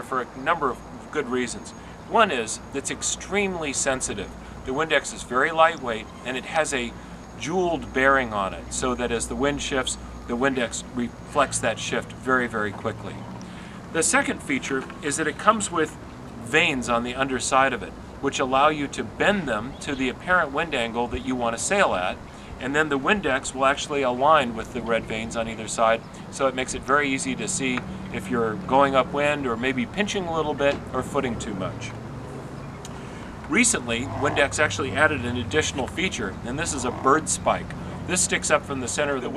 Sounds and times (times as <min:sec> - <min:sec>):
Speech: 0:00.0 - 0:13.2, 0:13.9 - 0:32.0, 0:33.5 - 0:39.3.